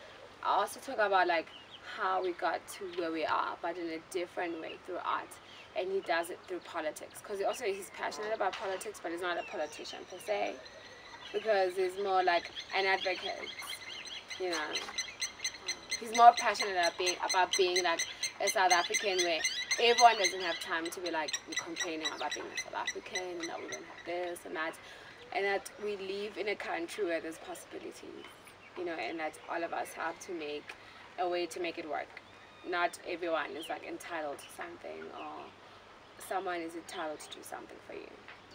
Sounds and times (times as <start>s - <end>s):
Chirp, tweet: 1.4s - 3.0s, 7.5s - 24.1s.